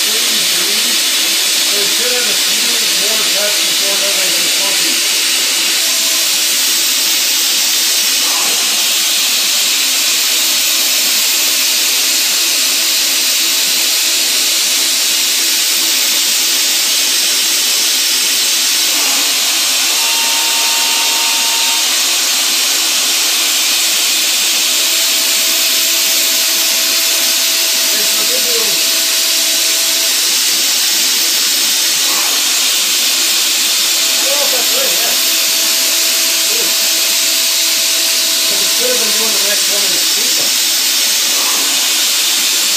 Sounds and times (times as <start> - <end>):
Speech: 0.0 - 1.0, 1.7 - 5.0, 27.9 - 28.9, 34.2 - 35.2, 36.4 - 36.8, 38.5 - 40.6.